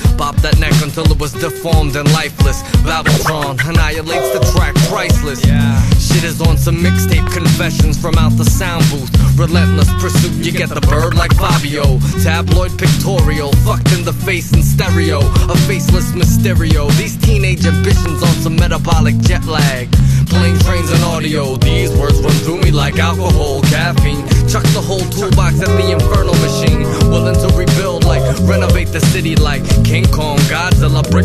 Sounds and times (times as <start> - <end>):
Music: 0.0 - 31.2.